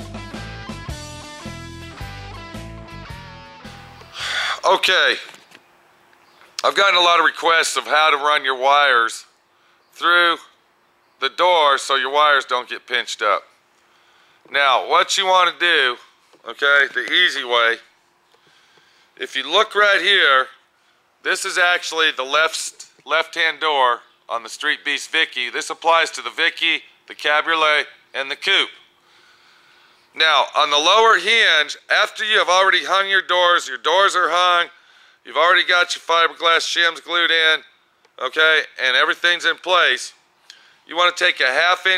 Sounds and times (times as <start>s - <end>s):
Speech: 4.6s - 5.4s, 6.6s - 9.3s, 10.0s - 10.6s, 11.2s - 13.5s, 14.5s - 17.9s, 19.2s - 20.6s, 21.2s - 28.8s, 30.2s - 40.2s, 40.9s - 41.9s.